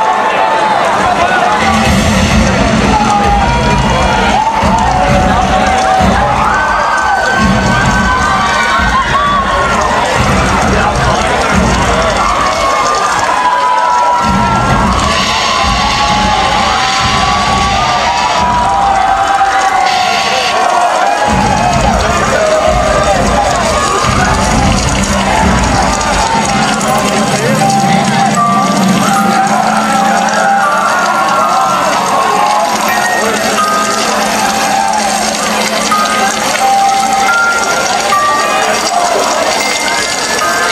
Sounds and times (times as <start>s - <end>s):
Speech: 0.0s - 17.6s
Music: 0.0s - 40.7s.